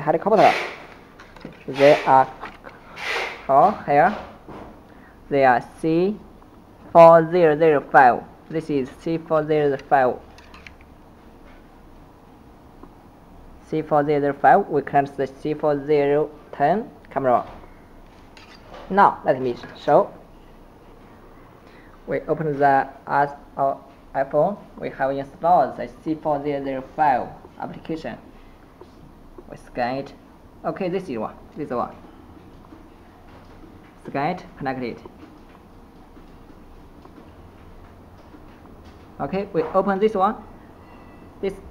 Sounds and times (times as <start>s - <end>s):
Speech: 0.0s - 0.6s, 1.7s - 2.4s, 3.5s - 4.3s, 5.3s - 6.3s, 6.9s - 10.2s, 13.6s - 17.6s, 18.9s - 20.2s, 22.1s - 28.2s, 29.5s - 32.0s, 34.0s - 35.1s, 39.2s - 40.4s, 41.4s - 41.7s.